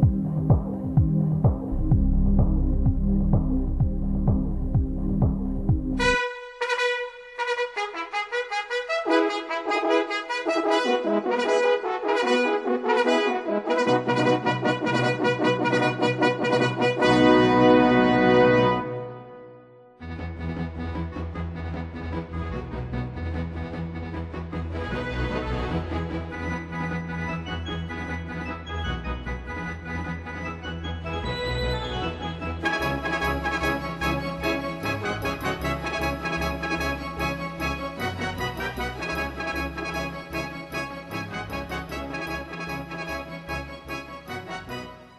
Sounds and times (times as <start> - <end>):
Music: 0.0 - 45.1.